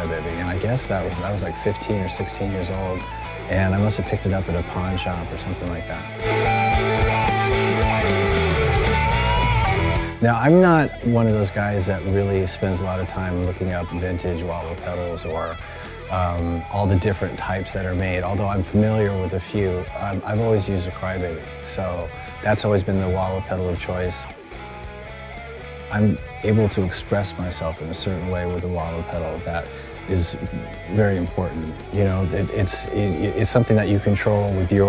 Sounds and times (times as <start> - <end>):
Speech: 0.0 - 6.1, 10.2 - 24.3, 25.9 - 34.8
Music: 0.0 - 34.8.